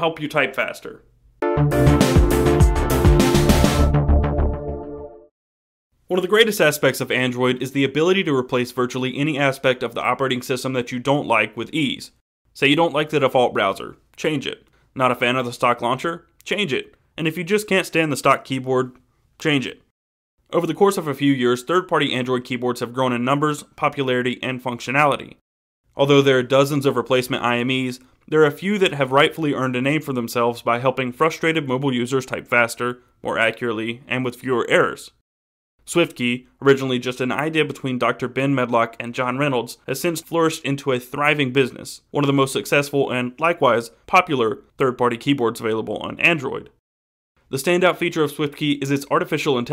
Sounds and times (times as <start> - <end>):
Speech: 0.0 - 1.1, 6.1 - 19.9, 20.5 - 25.4, 26.0 - 35.2, 35.9 - 46.8, 47.5 - 49.7.